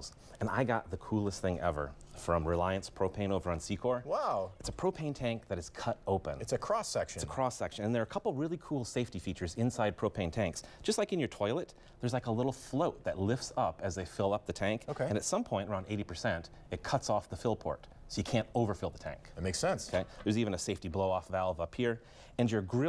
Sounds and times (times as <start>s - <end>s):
Speech: 0.0s - 22.8s.